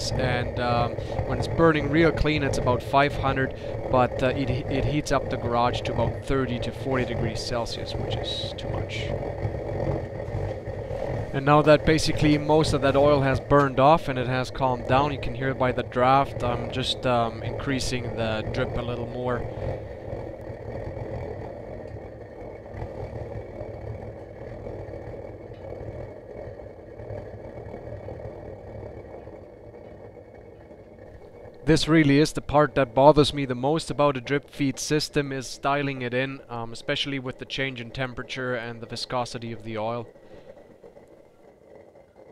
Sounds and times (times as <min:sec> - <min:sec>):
Speech: 0:00.0 - 0:09.1, 0:11.4 - 0:19.4, 0:31.7 - 0:40.1.